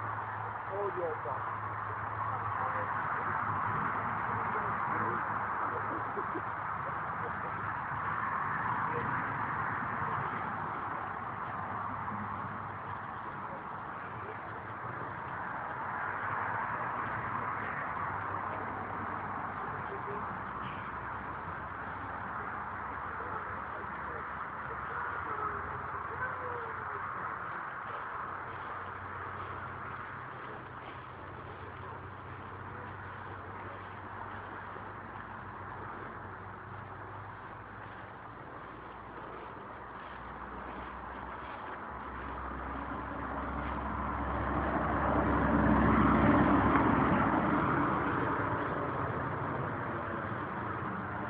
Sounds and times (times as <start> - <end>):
Speech: 0.4 - 1.5, 2.3 - 7.7, 19.5 - 21.0, 23.0 - 28.0.